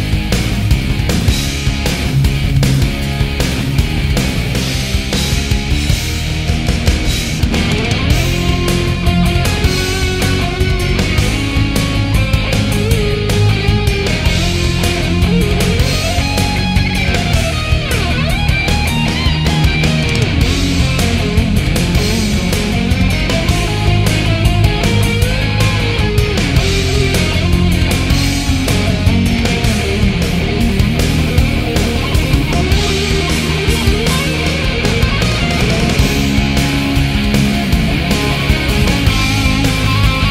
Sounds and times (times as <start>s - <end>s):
Guitar: 0.0s - 40.3s.